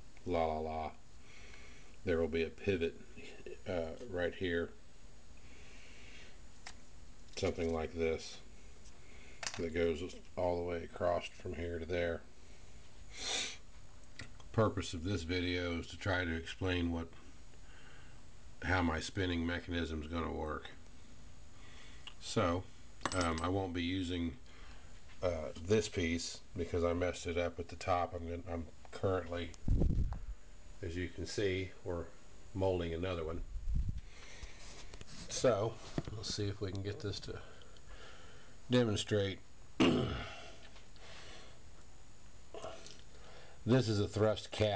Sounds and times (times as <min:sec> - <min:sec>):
Speech: 0:00.2 - 0:01.0, 0:02.0 - 0:04.8, 0:07.4 - 0:08.4, 0:09.6 - 0:12.3, 0:14.5 - 0:17.2, 0:18.6 - 0:20.8, 0:22.1 - 0:24.4, 0:25.2 - 0:29.6, 0:30.8 - 0:33.5, 0:35.3 - 0:37.6, 0:38.7 - 0:39.4, 0:43.6 - 0:44.7.